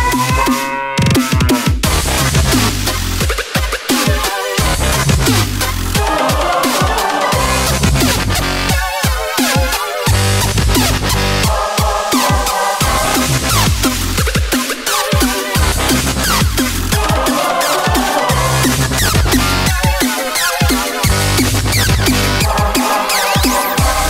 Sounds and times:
Dubstep: 0.0s - 24.1s.

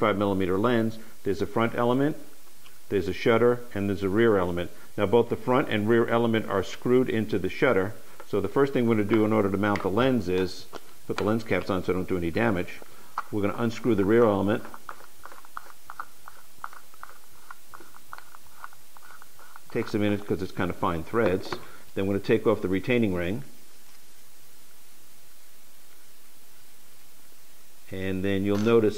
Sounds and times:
Speech: 0.0s - 2.2s, 2.9s - 14.7s, 19.7s - 23.5s, 27.9s - 28.9s.

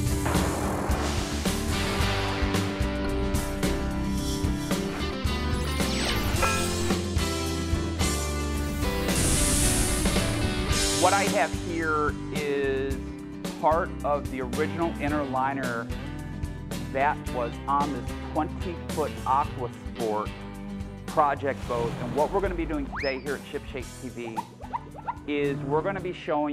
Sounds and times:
Music: 0.0s - 26.5s
Speech: 11.0s - 13.0s, 13.6s - 15.9s, 16.9s - 20.3s, 21.1s - 24.4s, 25.3s - 26.5s.

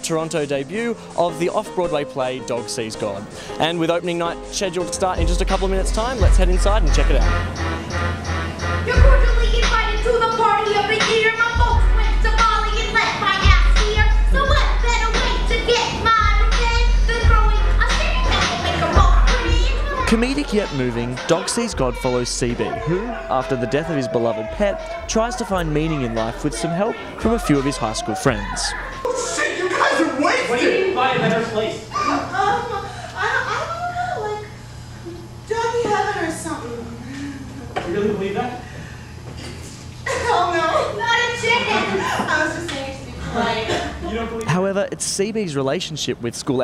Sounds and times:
Music: 0.0s - 29.6s.

